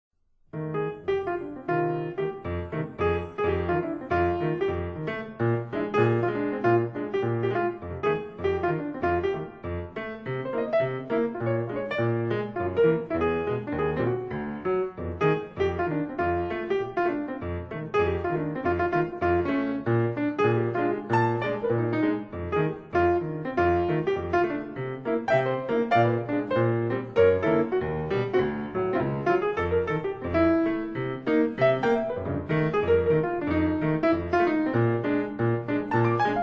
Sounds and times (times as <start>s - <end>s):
Electric piano: 0.5s - 36.4s.